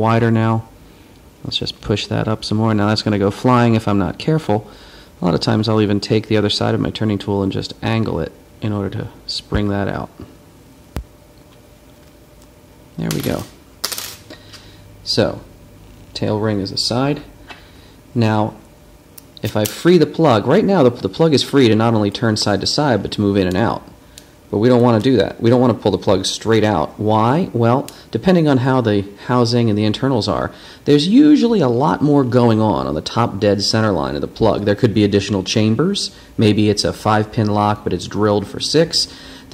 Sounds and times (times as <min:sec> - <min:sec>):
Speech: 0:00.0 - 0:00.7, 0:01.4 - 0:10.3, 0:13.0 - 0:13.6, 0:15.0 - 0:15.5, 0:16.2 - 0:17.3, 0:18.2 - 0:18.6, 0:19.4 - 0:23.9, 0:24.5 - 0:39.5.